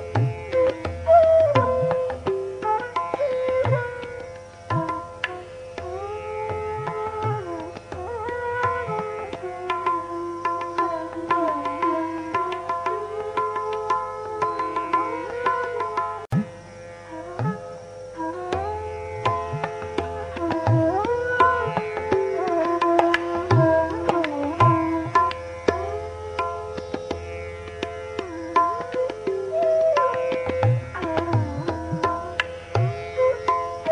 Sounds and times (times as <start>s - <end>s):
Music: 0.0s - 33.9s.